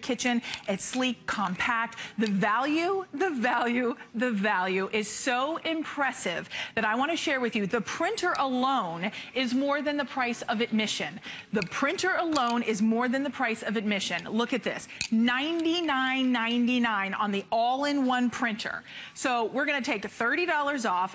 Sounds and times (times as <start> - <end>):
Speech: 0.0 - 21.1.